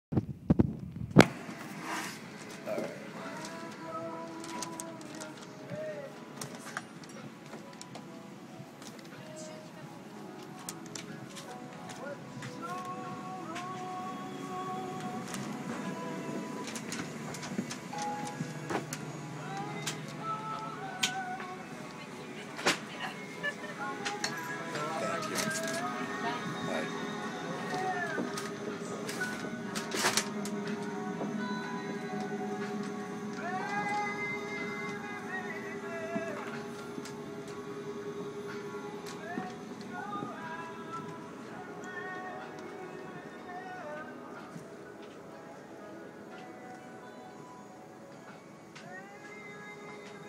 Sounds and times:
Music: 1.2s - 50.2s.

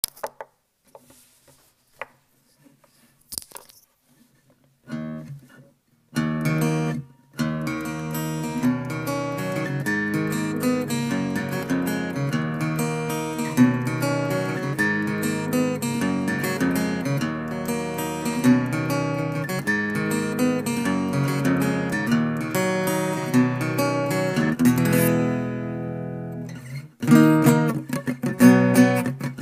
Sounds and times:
Inside, small room: 0.0s - 29.4s
Acoustic guitar: 3.4s - 29.4s.

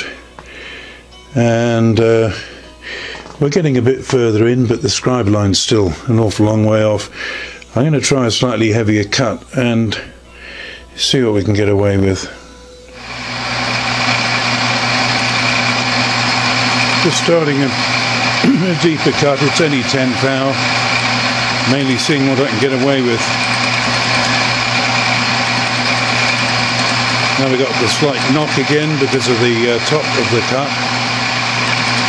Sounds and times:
Speech: 1.4s - 2.5s, 3.4s - 7.1s, 7.7s - 10.1s, 11.0s - 12.4s, 17.0s - 20.6s, 21.6s - 23.4s, 27.4s - 30.8s
Engine: 13.0s - 32.0s.

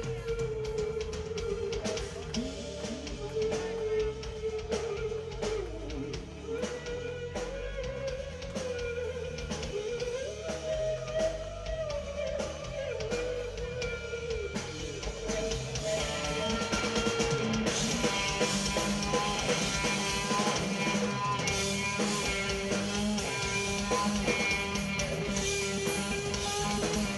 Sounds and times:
Guitar: 0.0s - 27.1s.

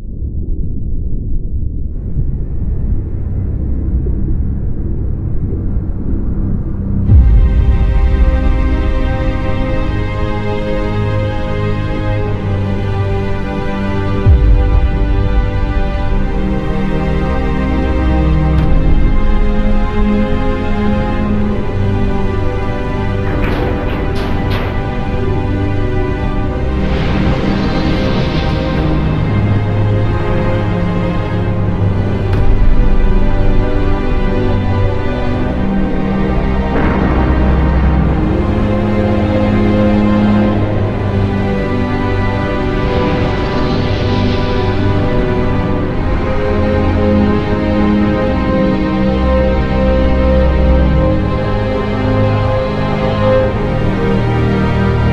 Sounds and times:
Music: 0.0s - 55.1s.

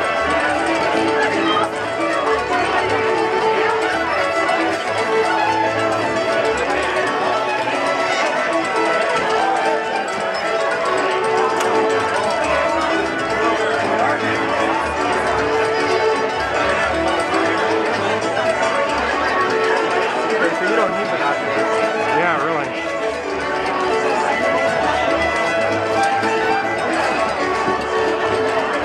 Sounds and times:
Speech: 0.0s - 28.8s
Violin, fiddle: 0.0s - 28.8s.

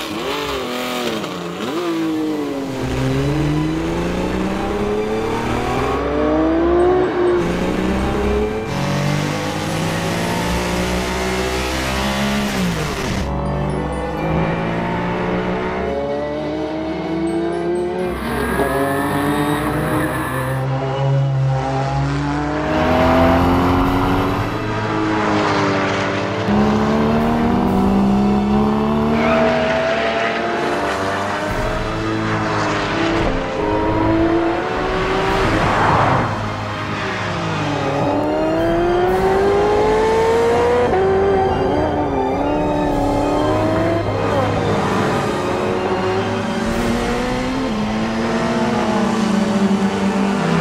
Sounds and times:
Music: 2.5s - 21.4s, 22.4s - 25.8s, 26.4s - 50.3s.

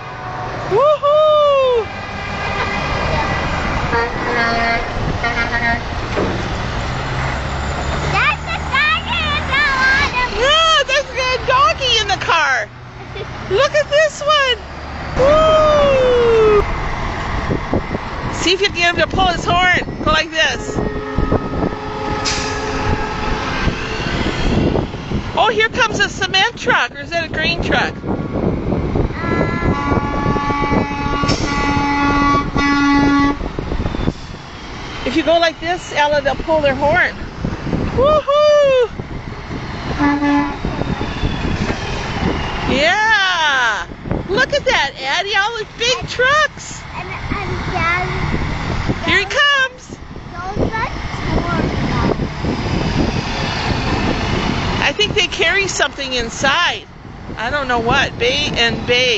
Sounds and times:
Vehicle: 0.0s - 59.1s.

